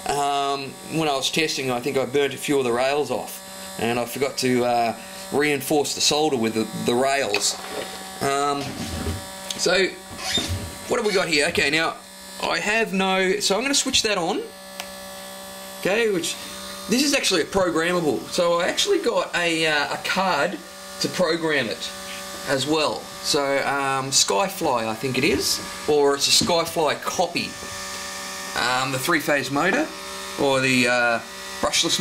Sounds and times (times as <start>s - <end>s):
Speech: 0.0s - 7.6s, 8.2s - 8.8s, 9.5s - 10.0s, 10.9s - 14.5s, 15.8s - 27.6s, 28.6s - 32.0s.